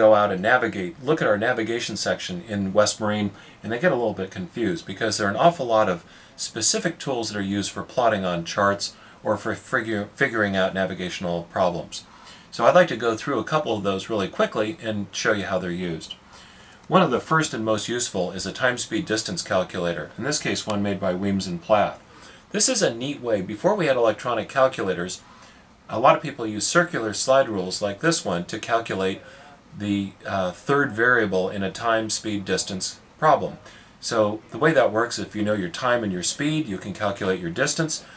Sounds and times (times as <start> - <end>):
Speech: 0.0 - 16.2, 16.9 - 25.2, 25.9 - 38.1.